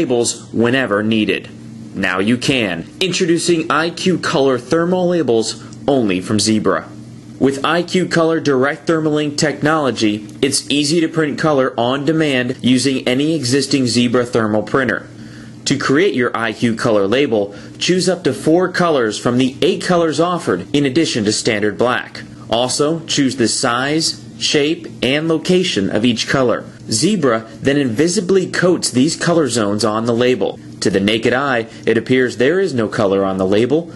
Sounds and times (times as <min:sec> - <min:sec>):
Speech: 0:00.0 - 0:33.9.